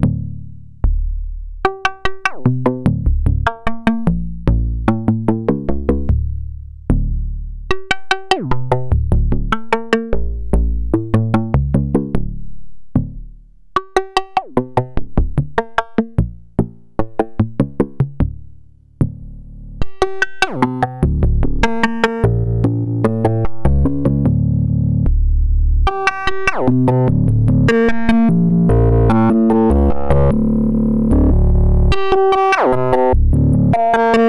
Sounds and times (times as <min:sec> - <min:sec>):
Music: 0:00.0 - 0:34.2.